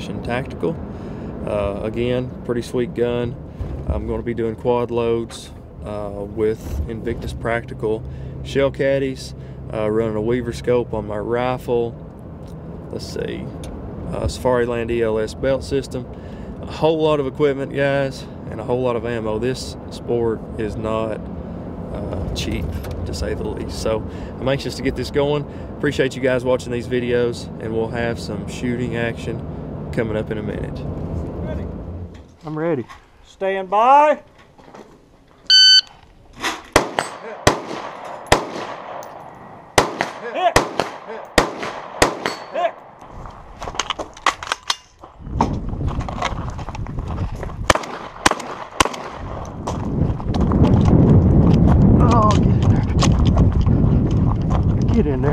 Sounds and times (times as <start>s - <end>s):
Outside, rural or natural: 0.0s - 55.3s.